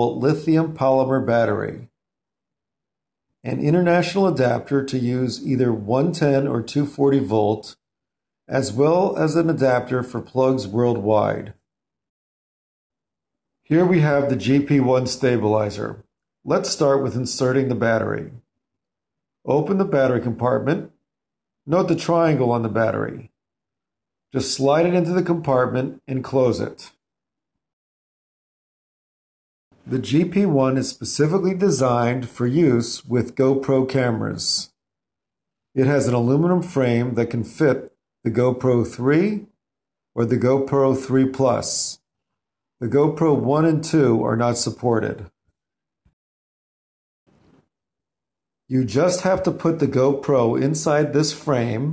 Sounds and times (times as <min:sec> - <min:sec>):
Speech: 0:00.0 - 0:01.9, 0:03.5 - 0:07.8, 0:08.5 - 0:11.5, 0:13.7 - 0:18.4, 0:19.5 - 0:20.9, 0:21.7 - 0:23.3, 0:24.4 - 0:27.0, 0:29.9 - 0:34.7, 0:35.8 - 0:39.5, 0:40.2 - 0:42.0, 0:42.8 - 0:45.3, 0:48.7 - 0:51.9.